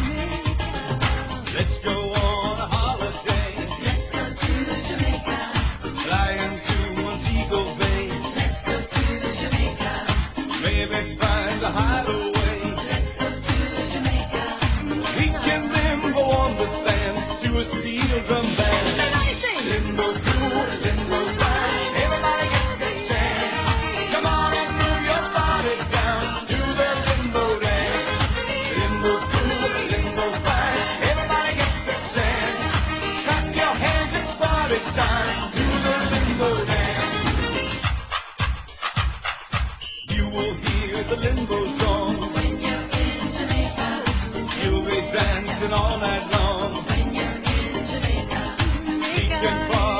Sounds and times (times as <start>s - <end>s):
Dance music: 0.0s - 49.9s.